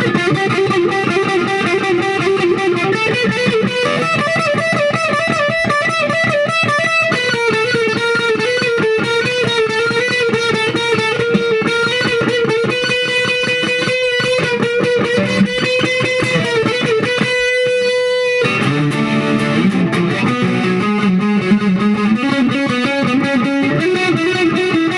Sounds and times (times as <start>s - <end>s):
Electric guitar: 0.0s - 24.9s.